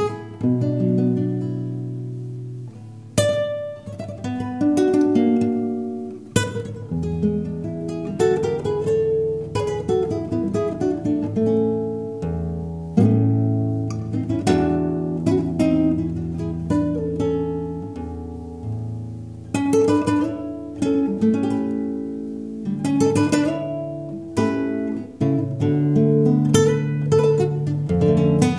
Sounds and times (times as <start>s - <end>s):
Acoustic guitar: 0.0s - 28.5s
Strum: 0.0s - 28.5s.